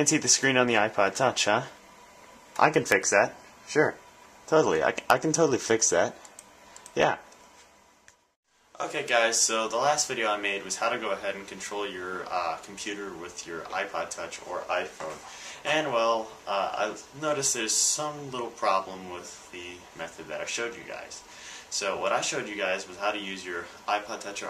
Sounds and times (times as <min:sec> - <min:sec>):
Speech: 0:00.0 - 0:01.8, 0:02.6 - 0:06.2, 0:07.0 - 0:07.3, 0:08.8 - 0:24.4
Inside, small room: 0:00.0 - 0:24.4.